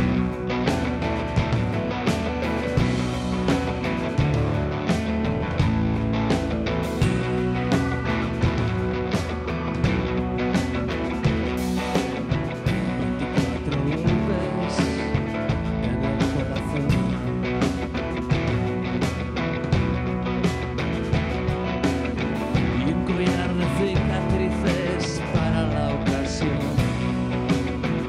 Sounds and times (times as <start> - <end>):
Music: 0.0 - 28.0.